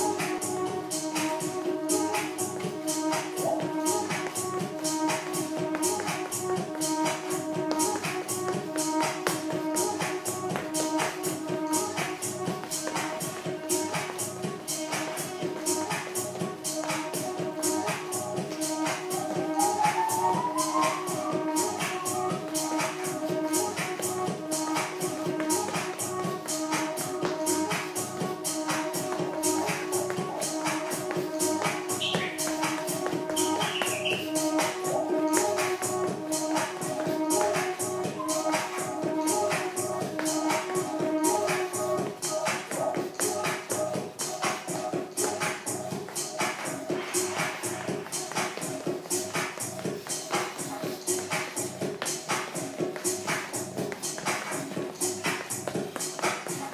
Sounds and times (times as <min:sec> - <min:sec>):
Music: 0:00.0 - 0:56.7
Shuffle: 0:00.0 - 0:56.7.